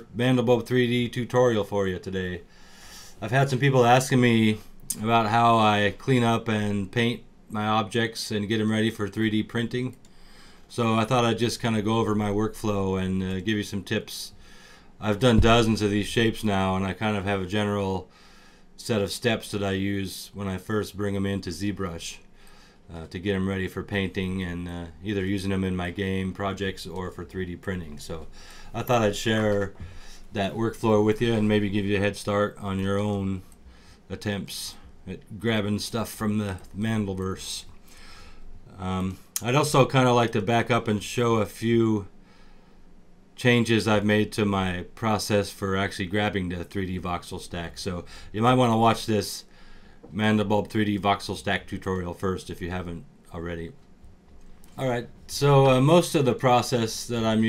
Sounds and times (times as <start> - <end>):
Speech: 0.0 - 2.4, 3.2 - 10.0, 10.7 - 14.4, 15.0 - 18.1, 18.8 - 22.3, 22.9 - 33.5, 34.1 - 37.7, 38.7 - 42.1, 43.4 - 49.5, 50.1 - 53.8, 54.8 - 57.4.